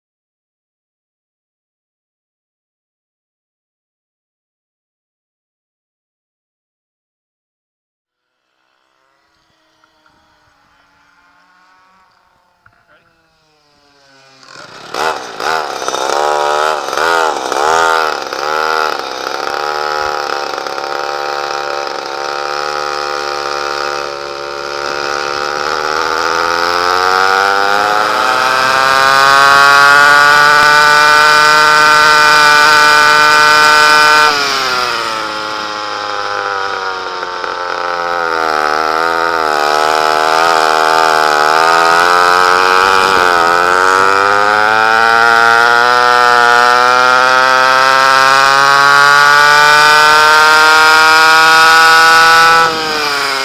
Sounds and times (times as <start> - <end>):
Medium engine (mid frequency): 8.1 - 53.4
Vehicle: 8.1 - 53.4
Accelerating, revving, vroom: 13.5 - 53.4.